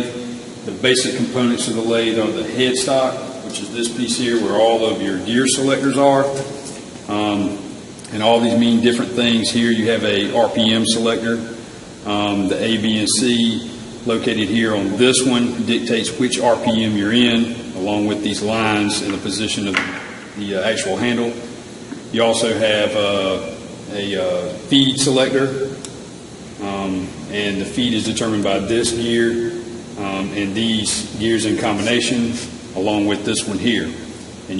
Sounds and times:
Speech: 0.0s - 21.4s, 22.1s - 25.8s, 26.6s - 34.5s.

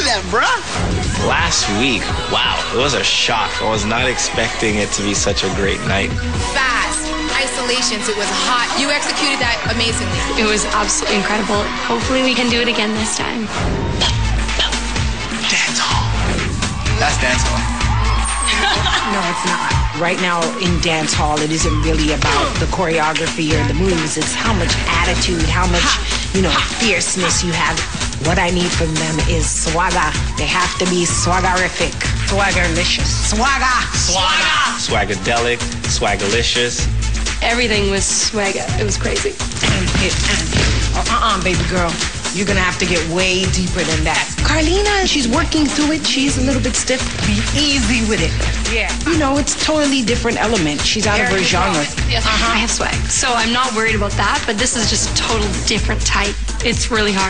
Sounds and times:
Music: 0.0s - 57.3s.

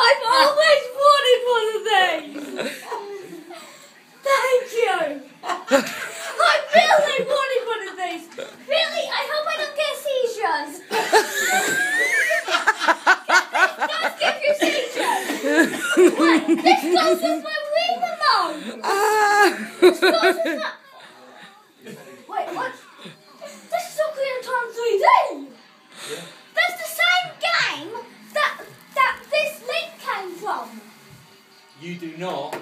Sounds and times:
Child speech, kid speaking: 0.0s - 3.6s, 4.2s - 5.3s, 6.2s - 10.9s, 13.5s - 21.0s, 21.9s - 25.6s, 26.5s - 30.9s.

